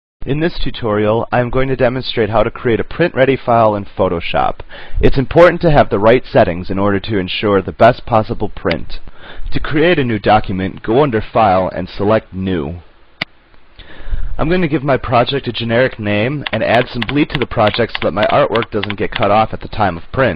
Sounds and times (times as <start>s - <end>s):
Speech: 0.2s - 12.9s, 14.4s - 20.3s.